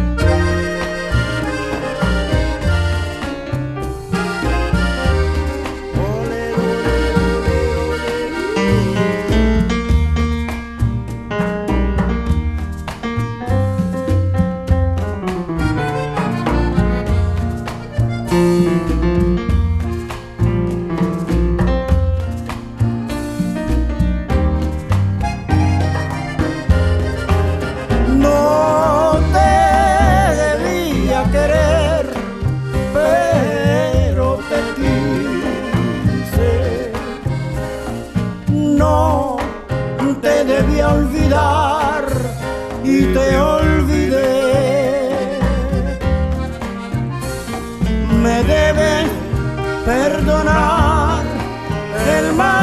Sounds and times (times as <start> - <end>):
Musical instrument: 0.0 - 52.6.